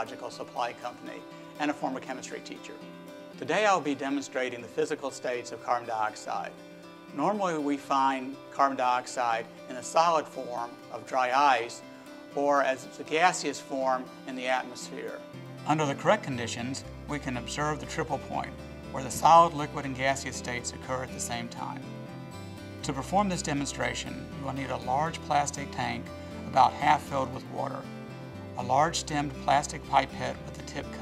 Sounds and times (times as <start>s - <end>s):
Speech: 0.0s - 2.8s, 3.4s - 6.5s, 7.1s - 11.8s, 12.4s - 21.8s, 22.8s - 27.8s, 28.6s - 31.0s
Music: 0.0s - 31.0s.